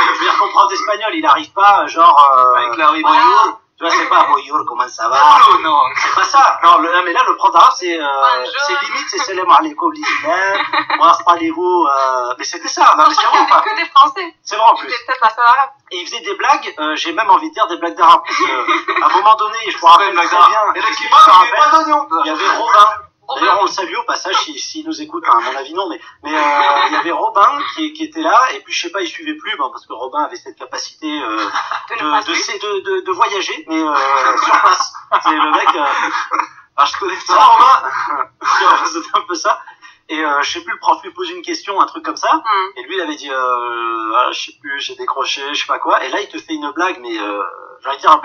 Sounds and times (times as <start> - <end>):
Radio: 0.0 - 29.9, 30.6 - 43.4
Speech: 0.0 - 48.2.